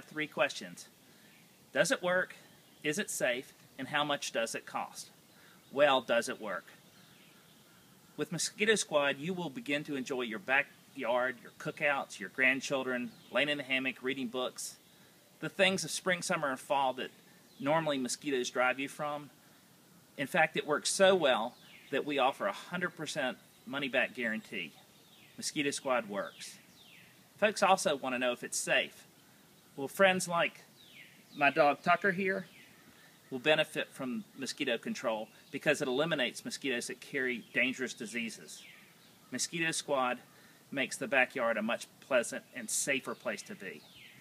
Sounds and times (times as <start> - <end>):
Speech: 0.0 - 0.9, 1.7 - 6.8, 8.2 - 14.8, 15.4 - 19.3, 20.2 - 24.8, 25.4 - 26.6, 27.4 - 29.1, 29.8 - 30.7, 31.4 - 32.5, 33.3 - 38.6, 39.3 - 43.9.